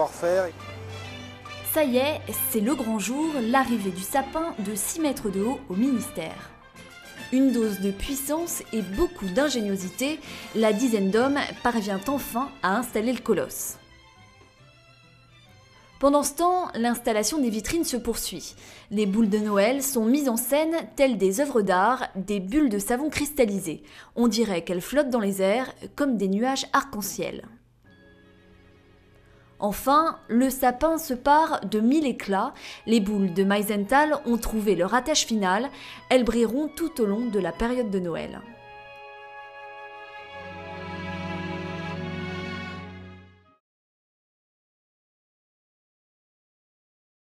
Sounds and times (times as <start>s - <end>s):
Speech: 0.0s - 0.6s, 1.7s - 6.5s, 7.3s - 13.8s, 16.0s - 27.6s, 29.6s - 38.6s
Music: 0.0s - 43.6s.